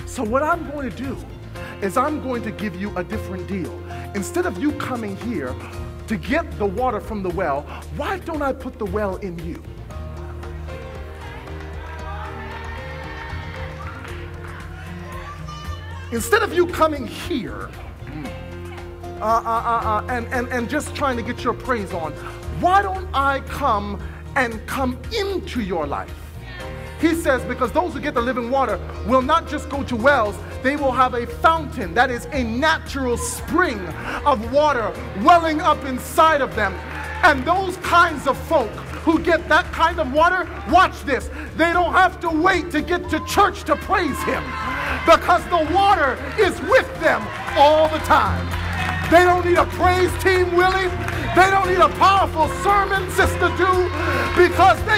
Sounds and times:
Music: 0.0s - 54.9s
Speech: 1.8s - 9.6s, 16.1s - 17.7s, 19.2s - 26.1s, 27.0s - 44.4s, 49.1s - 54.9s.

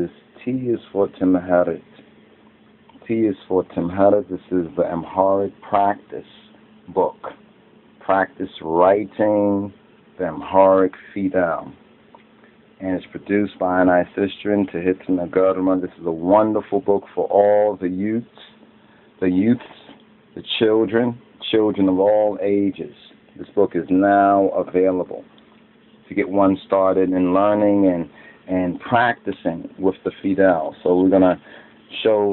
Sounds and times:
Speech: 0.0s - 2.0s, 3.0s - 7.4s, 8.0s - 11.8s, 12.8s - 18.6s, 19.2s - 25.3s, 26.0s - 32.3s.

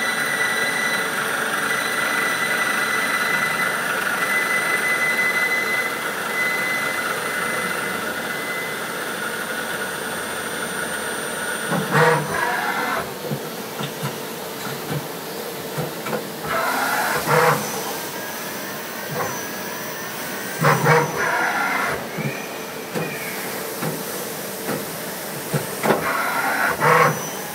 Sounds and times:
Power tool: 0.0s - 14.0s, 14.8s - 27.5s.

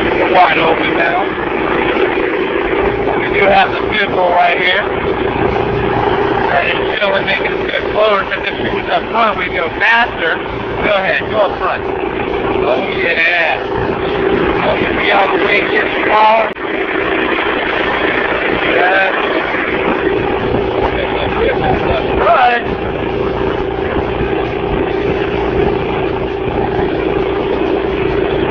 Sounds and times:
Motorboat, speedboat: 0.0s - 28.5s
Speech: 0.2s - 1.4s, 3.2s - 4.9s, 6.4s - 11.9s, 12.6s - 13.7s, 14.6s - 16.6s, 18.6s - 19.2s, 20.8s - 22.8s.

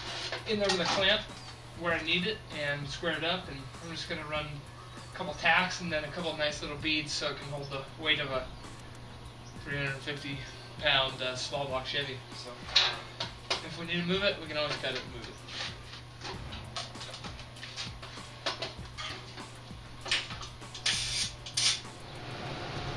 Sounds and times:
Music: 0.0s - 22.9s
Speech: 0.5s - 4.6s, 5.2s - 8.5s, 9.6s - 12.7s, 13.6s - 15.4s.

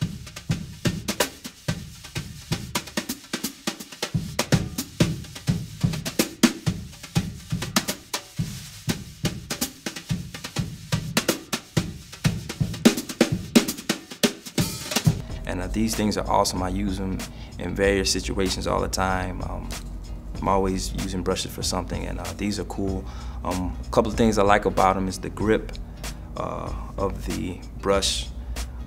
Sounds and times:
Music: 0.0s - 28.8s.

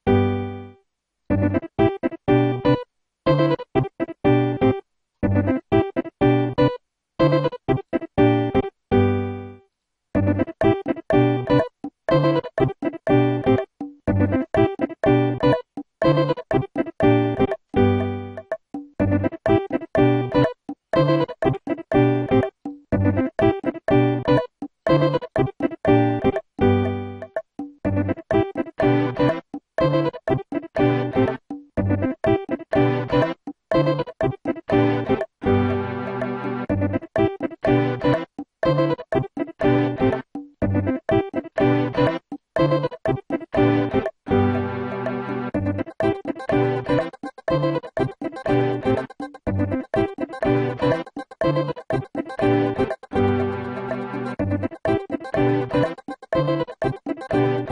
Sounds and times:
Music: 0.0s - 57.7s.

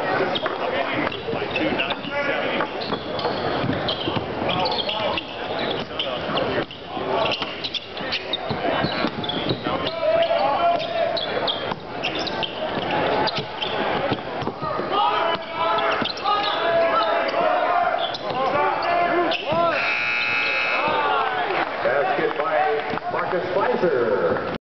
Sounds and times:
Speech: 0.0s - 19.8s, 20.8s - 24.4s.

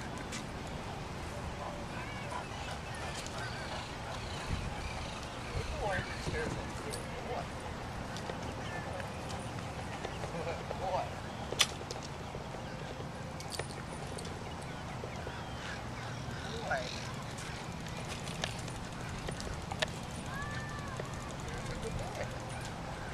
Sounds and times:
Bicycle: 0.0s - 23.1s.

